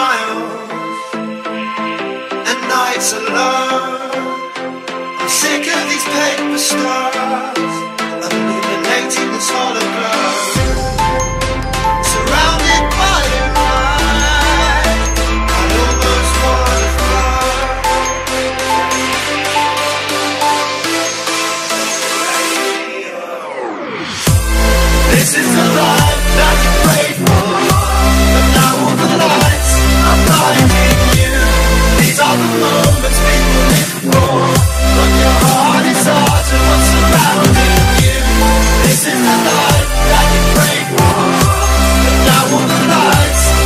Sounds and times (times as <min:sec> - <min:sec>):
Music: 0:00.0 - 0:43.6.